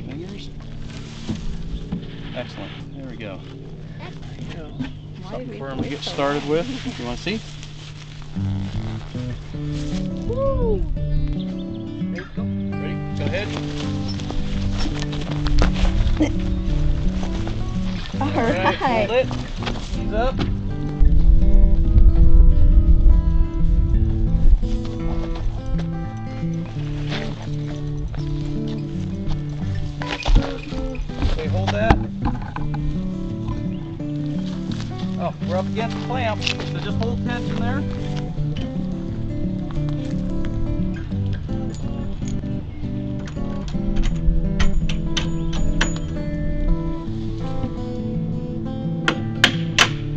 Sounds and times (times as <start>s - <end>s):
Music: 0.0s - 50.1s.